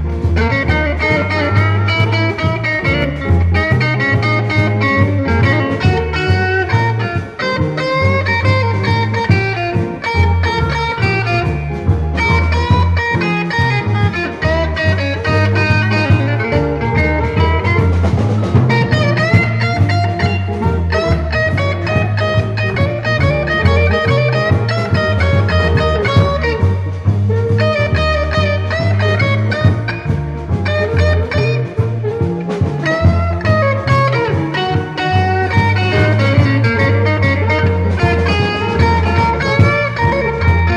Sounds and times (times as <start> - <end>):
Music: 0.0 - 40.7.